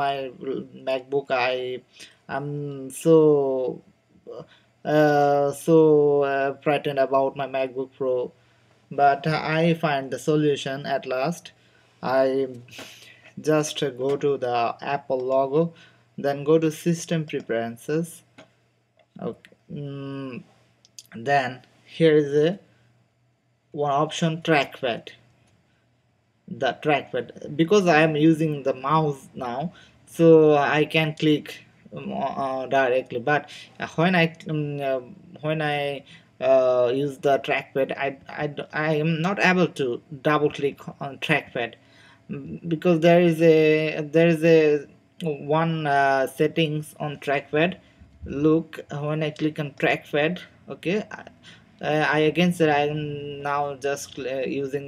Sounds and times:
Speech: 0:00.0 - 0:18.3, 0:19.2 - 0:22.6, 0:23.8 - 0:25.2, 0:26.5 - 0:54.8.

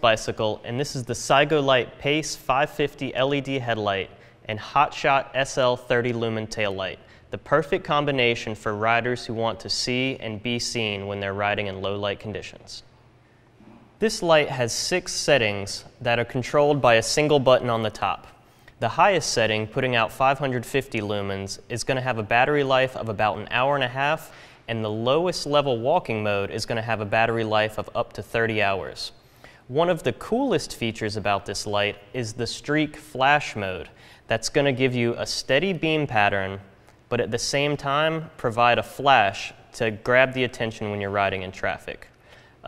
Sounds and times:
Speech: 0:00.0 - 0:12.9, 0:13.6 - 0:42.6.

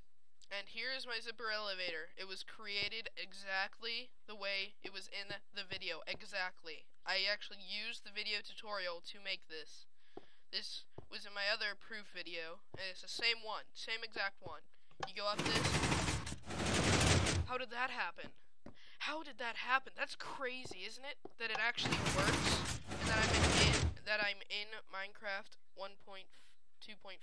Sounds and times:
Speech: 0:00.4 - 0:09.9, 0:10.5 - 0:15.9, 0:17.5 - 0:18.4, 0:19.0 - 0:27.2.

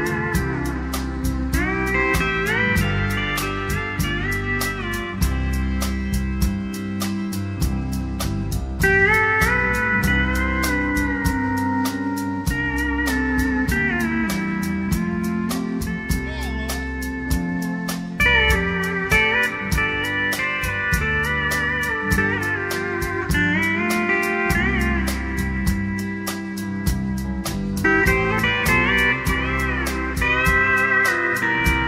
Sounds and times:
Steel guitar, slide guitar: 0:00.0 - 0:31.8.

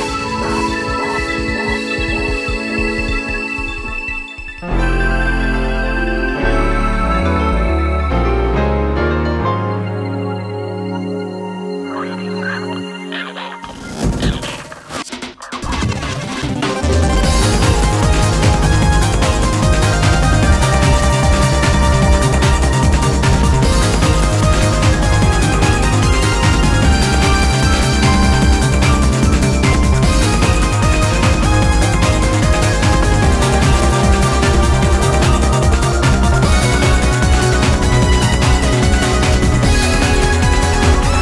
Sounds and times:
Music: 0:00.0 - 0:41.2.

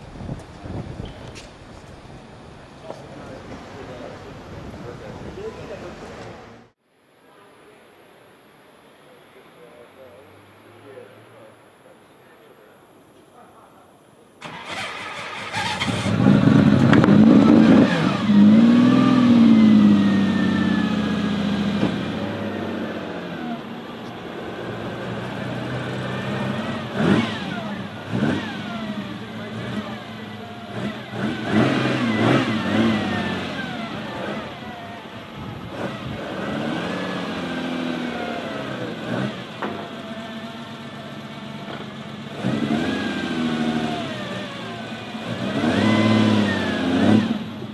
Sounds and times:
Outside, urban or manmade: 0:00.0 - 0:47.7
Car: 0:14.4 - 0:47.7.

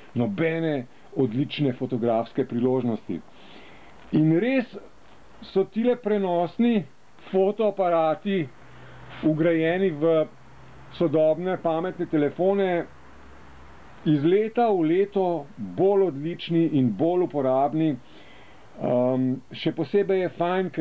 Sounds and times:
Speech: 0:00.0 - 0:03.3, 0:04.1 - 0:08.5, 0:09.1 - 0:10.3, 0:10.9 - 0:12.9, 0:14.0 - 0:18.0, 0:18.8 - 0:20.8.

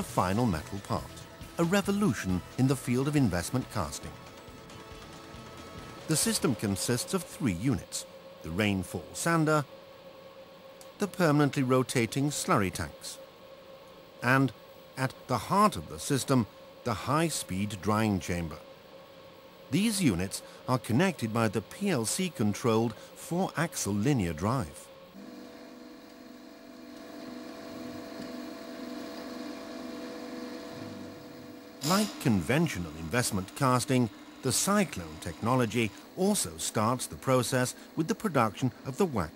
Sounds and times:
Speech: 0:00.0 - 0:04.2, 0:06.1 - 0:09.7, 0:11.0 - 0:13.2, 0:14.2 - 0:18.6, 0:19.7 - 0:24.9, 0:31.8 - 0:39.3.

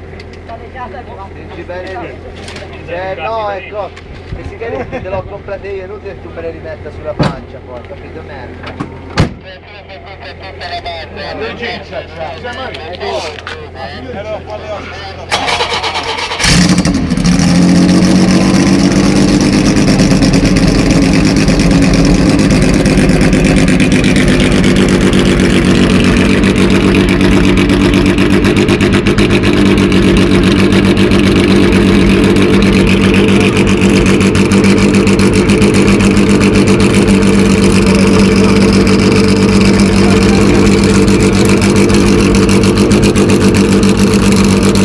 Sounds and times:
Speech: 0:00.5 - 0:08.6, 0:09.4 - 0:15.3.

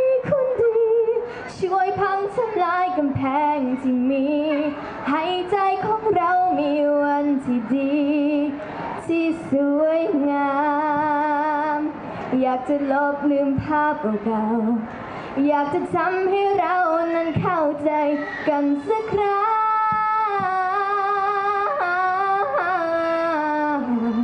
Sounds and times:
Female singing: 0:00.0 - 0:24.2.

